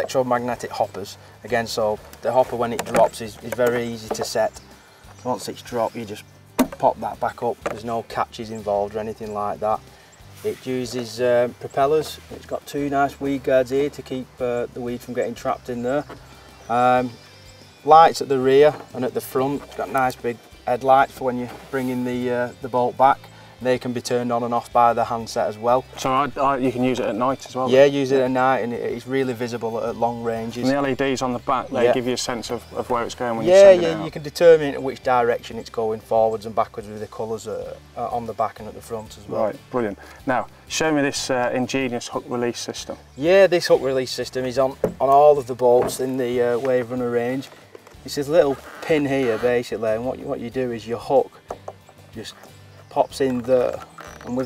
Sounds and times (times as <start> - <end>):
Speech: 0.0 - 4.6, 5.2 - 9.8, 10.4 - 17.2, 17.9 - 51.3, 52.2 - 54.4
Music: 0.0 - 54.4.